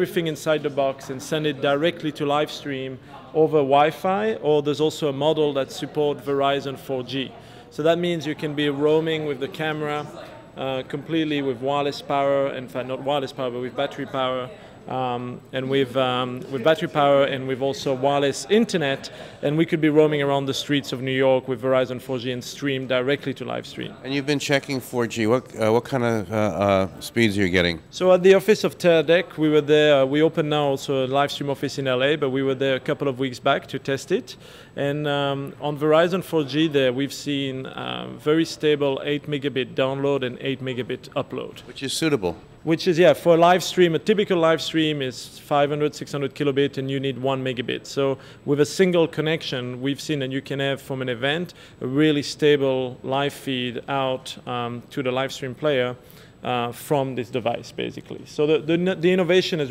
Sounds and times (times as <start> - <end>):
Speech: 0.0 - 59.7.